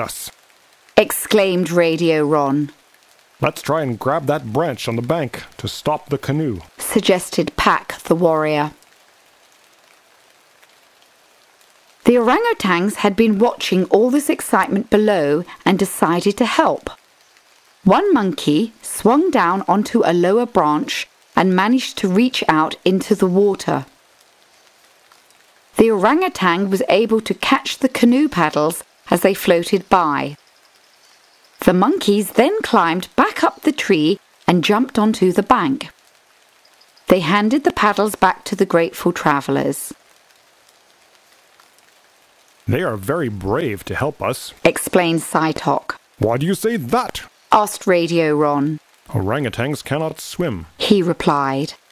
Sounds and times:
Speech: 0.0s - 0.4s, 1.0s - 2.8s, 3.4s - 8.8s, 12.1s - 17.0s, 17.9s - 23.9s, 25.8s - 30.4s, 31.6s - 35.9s, 37.1s - 40.0s, 42.7s - 51.8s.

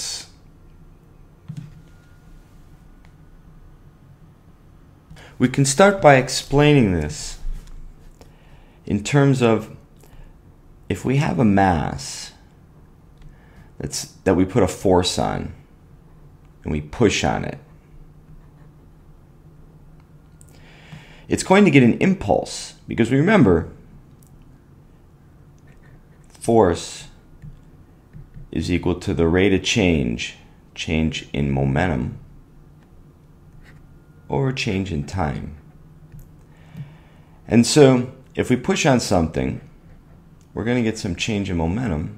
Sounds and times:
Speech: 0.0s - 0.4s, 5.4s - 7.5s, 8.9s - 9.8s, 10.9s - 12.5s, 13.8s - 15.6s, 16.6s - 17.7s, 21.3s - 23.8s, 26.3s - 27.2s, 28.5s - 32.3s, 34.3s - 35.6s, 37.5s - 39.7s, 40.5s - 42.1s.

